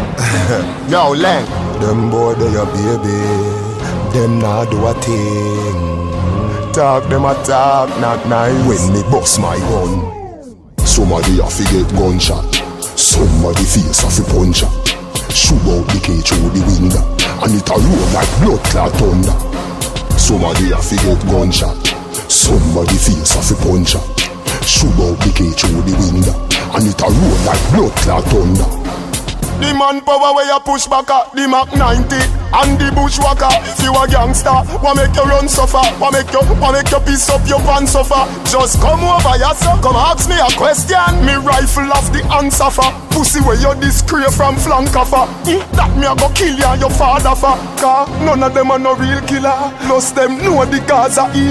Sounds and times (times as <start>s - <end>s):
Music: 0.0s - 51.5s.